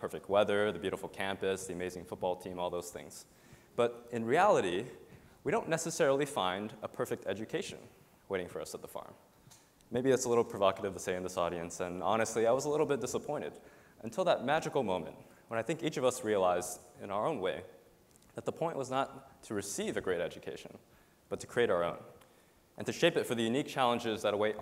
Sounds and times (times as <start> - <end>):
Speech: 0.0 - 9.2, 9.9 - 22.2, 22.8 - 24.6.